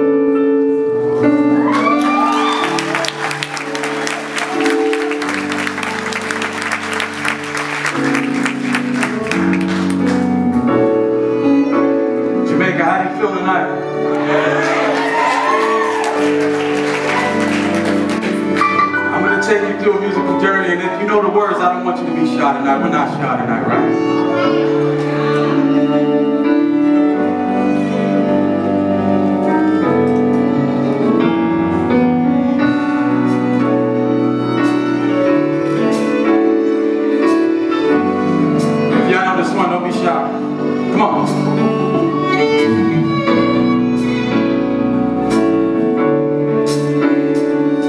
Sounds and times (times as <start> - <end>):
Violin, fiddle: 10.6 - 14.6, 15.2 - 47.8
Speech: 19.1 - 23.8, 39.0 - 41.4.